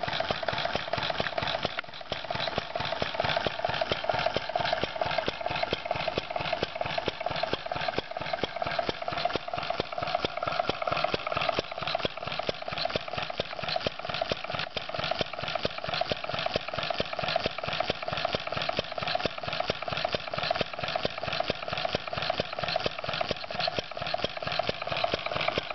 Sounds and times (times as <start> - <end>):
Idling: 0.0 - 25.7
Medium engine (mid frequency): 0.0 - 25.7.